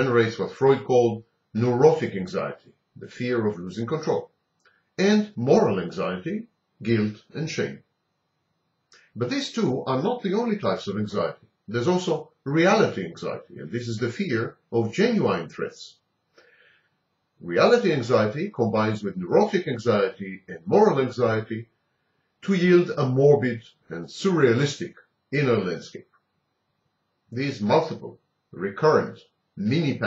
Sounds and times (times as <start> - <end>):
Speech: 0.0 - 4.4, 5.0 - 7.9, 9.2 - 16.0, 17.4 - 21.7, 22.4 - 26.1, 27.3 - 30.0.